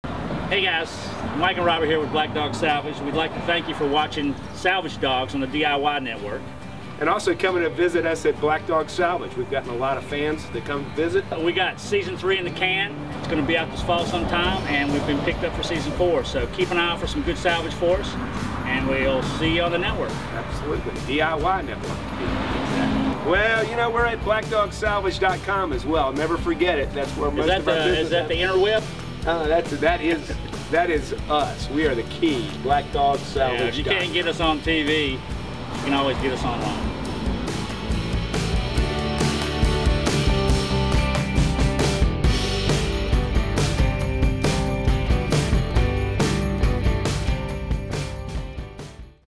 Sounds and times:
Music: 0.4s - 49.3s
Speech: 0.5s - 6.4s, 7.0s - 21.9s, 23.2s - 35.2s, 35.8s - 36.8s.

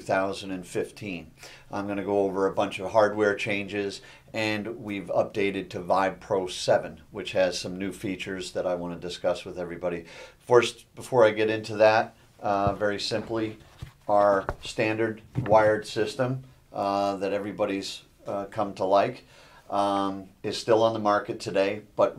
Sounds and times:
Speech: 0.0s - 22.1s.

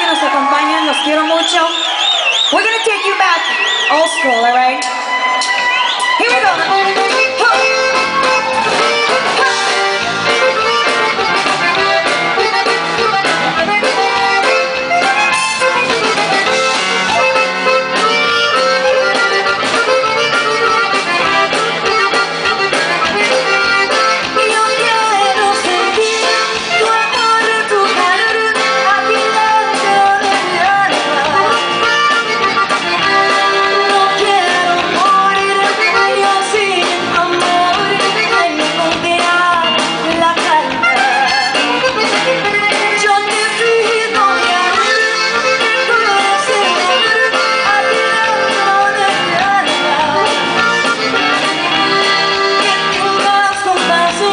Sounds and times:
Pop music: 3.9s - 54.3s
Funk: 5.3s - 54.3s.

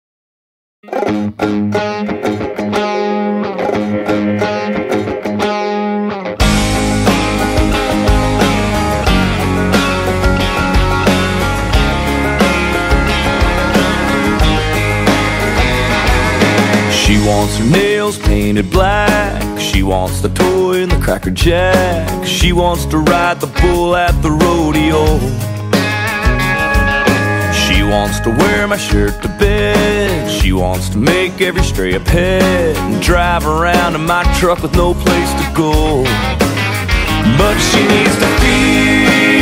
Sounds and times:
Country: 0.9s - 39.4s.

